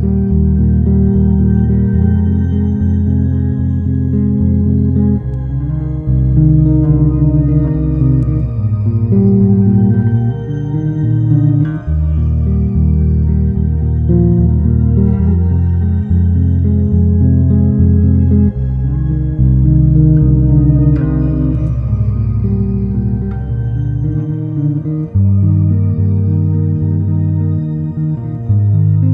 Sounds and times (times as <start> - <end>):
Ambient music: 0.0 - 29.1.